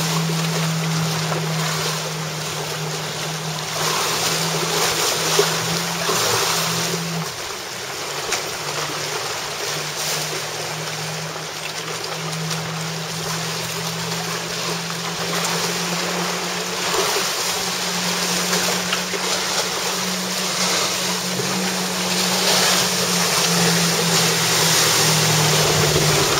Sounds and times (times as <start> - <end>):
Stream: 0.0 - 26.3.